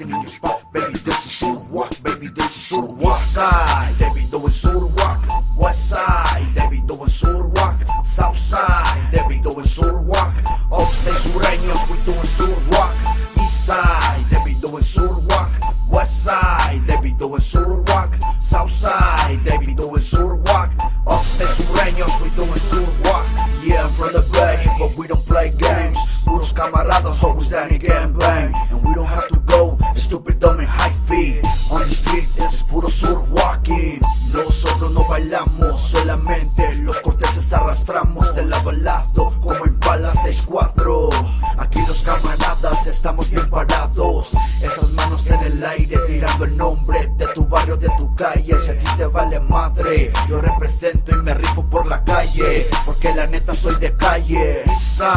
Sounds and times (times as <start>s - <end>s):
Music: 0.0s - 55.1s.